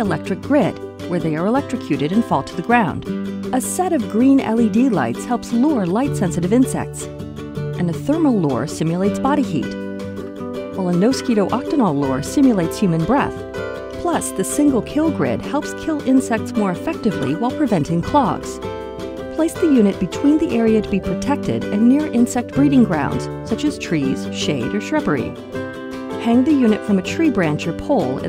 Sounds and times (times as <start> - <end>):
Speech: 0.0 - 3.0, 3.6 - 7.1, 7.8 - 9.8, 10.8 - 13.4, 14.0 - 18.6, 19.4 - 25.4, 26.2 - 28.2
Music: 0.0 - 28.2.